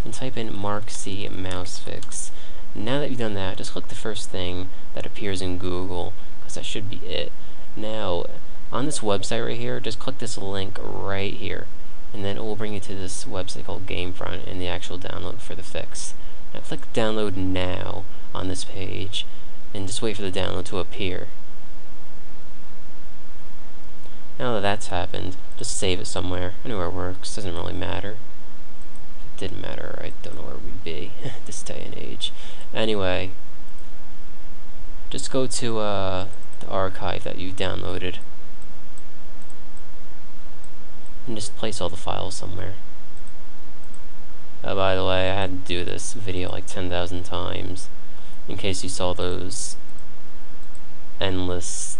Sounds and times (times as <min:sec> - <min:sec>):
Speech: 0:00.0 - 0:21.4, 0:24.4 - 0:28.2, 0:29.4 - 0:33.4, 0:35.1 - 0:38.2, 0:41.2 - 0:42.8, 0:44.6 - 0:47.9, 0:48.5 - 0:49.8, 0:51.2 - 0:51.9.